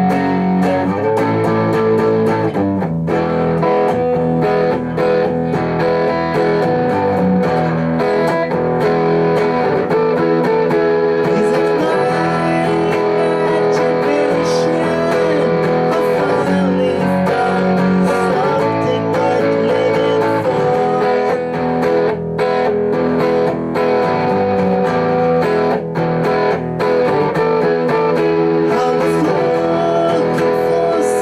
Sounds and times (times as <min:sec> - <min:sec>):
Bass guitar: 0:00.0 - 0:31.2
Electric guitar: 0:00.0 - 0:31.2
Strum: 0:00.0 - 0:31.2.